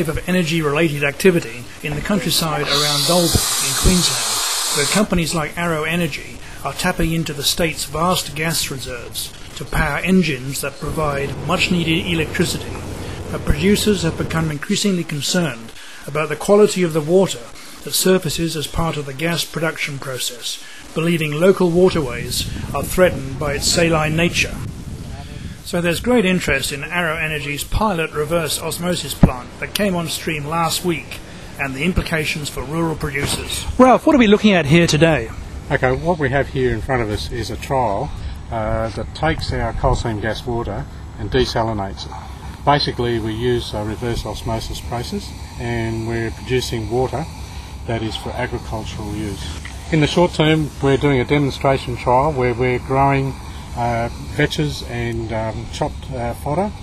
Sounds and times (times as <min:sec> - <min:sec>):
Speech: 0:00.0 - 0:47.3, 0:47.9 - 0:56.8.